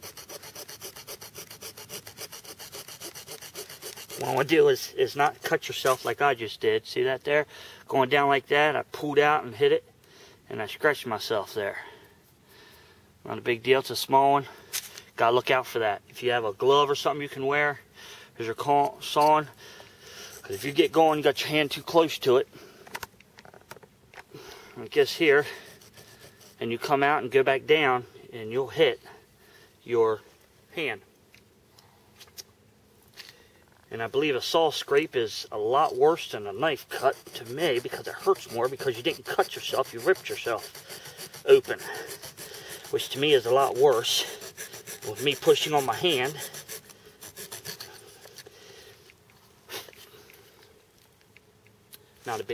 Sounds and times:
Speech: 4.2s - 9.8s, 10.5s - 11.9s, 13.3s - 14.5s, 15.2s - 17.8s, 18.4s - 19.5s, 20.5s - 22.5s, 24.8s - 25.6s, 26.6s - 29.1s, 29.9s - 31.0s, 33.9s - 40.6s, 41.5s - 42.0s, 42.9s - 44.4s, 45.0s - 46.4s, 52.2s - 52.5s.

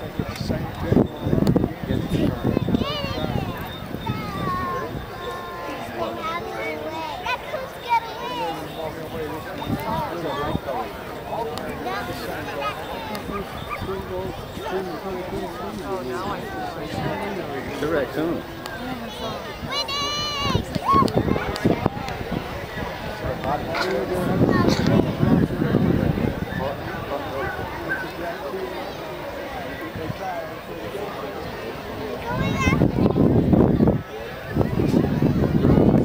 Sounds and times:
Speech: 0.0s - 36.0s.

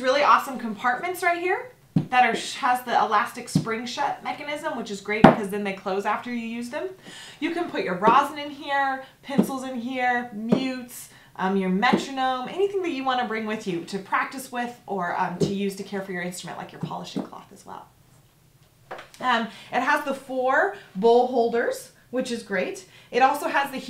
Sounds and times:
Speech: 0.0s - 17.9s, 19.2s - 23.9s.

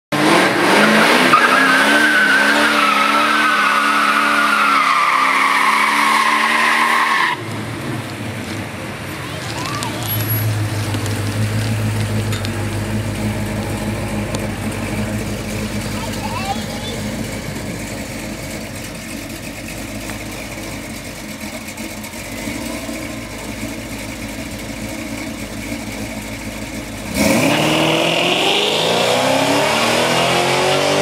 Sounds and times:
Race car, auto racing: 0.1s - 31.0s.

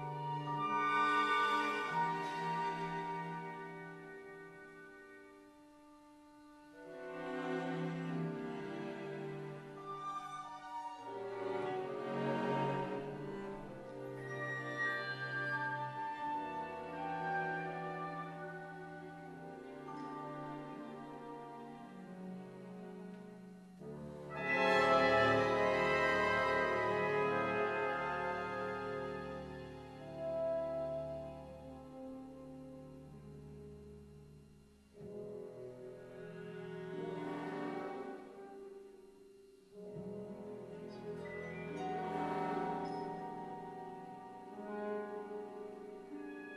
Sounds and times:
Classical music: 0.0s - 46.5s
Orchestra: 0.0s - 46.5s
Trombone: 24.2s - 33.1s.

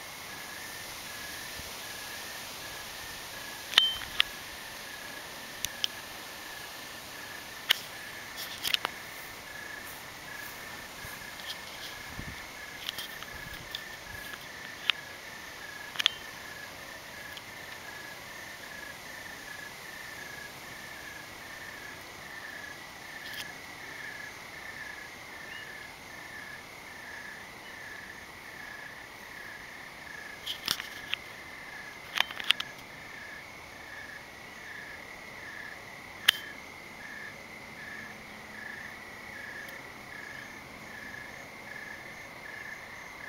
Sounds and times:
Outside, rural or natural: 0.0s - 43.2s.

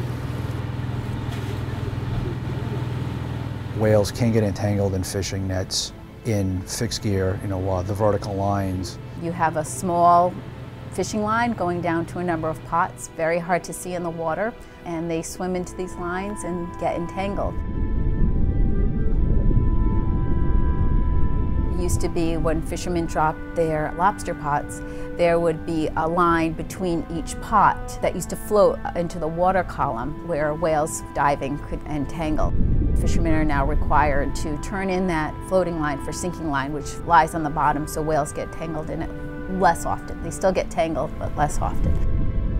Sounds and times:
Music: 0.6s - 42.5s
Speech: 3.8s - 10.4s, 21.8s - 42.0s.

